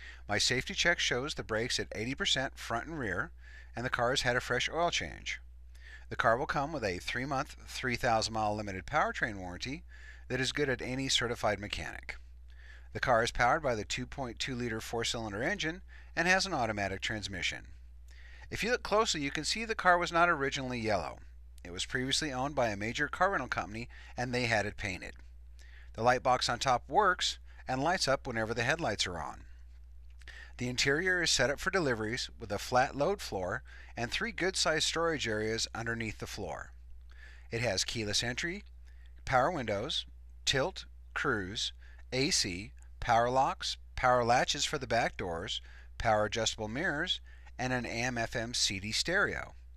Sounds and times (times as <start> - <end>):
Speech: 0.3 - 5.4, 6.1 - 12.2, 12.9 - 17.7, 18.5 - 25.2, 26.0 - 29.5, 30.6 - 36.8, 37.5 - 38.6, 39.2 - 49.6.